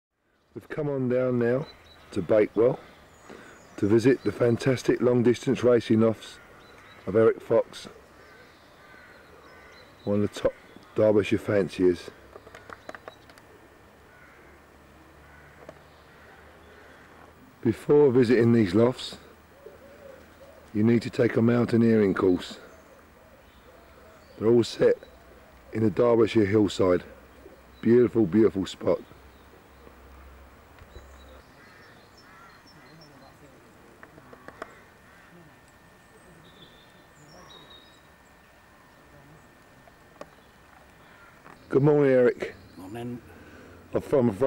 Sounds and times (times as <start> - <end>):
Speech: 0.6 - 2.8, 3.8 - 6.4, 7.1 - 8.0, 10.0 - 12.2, 17.6 - 19.3, 20.7 - 22.7, 24.4 - 25.1, 25.7 - 27.1, 27.8 - 29.1, 41.7 - 43.3, 43.9 - 44.4
Coo: 19.2 - 20.7.